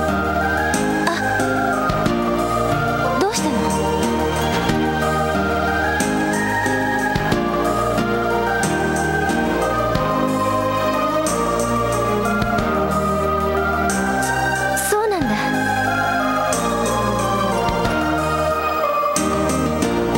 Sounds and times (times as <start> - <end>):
Music: 0.0 - 20.1
Speech: 1.1 - 1.3, 3.2 - 3.7, 14.8 - 15.5.